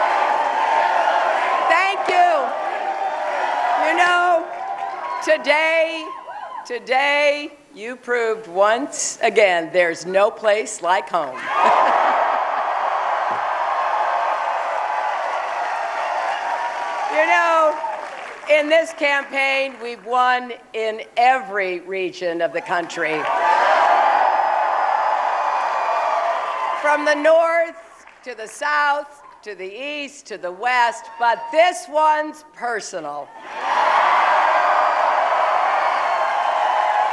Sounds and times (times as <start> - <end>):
Female speech, woman speaking: 1.7 - 2.5, 3.8 - 4.5, 5.2 - 6.1, 6.7 - 11.4, 17.2 - 17.8, 18.5 - 23.3, 26.9 - 33.3.